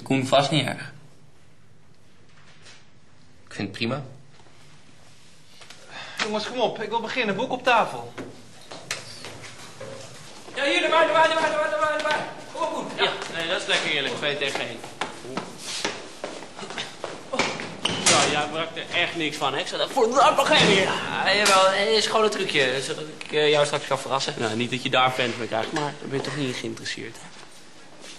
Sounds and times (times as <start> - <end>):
Inside, large room or hall: 0.0 - 28.1.